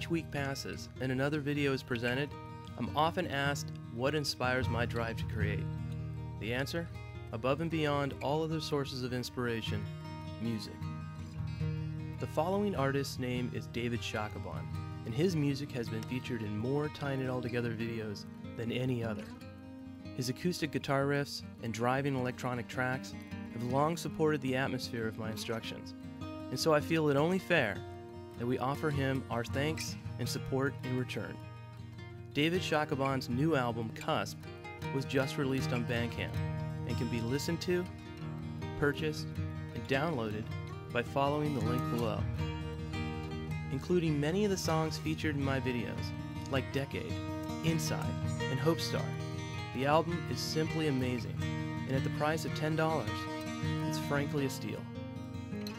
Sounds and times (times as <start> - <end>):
Speech: 0.0 - 5.7, 6.4 - 10.8, 12.2 - 19.4, 20.2 - 25.9, 26.5 - 27.8, 28.4 - 31.4, 32.4 - 37.9, 38.8 - 42.4, 43.7 - 54.9
Music: 0.0 - 55.7.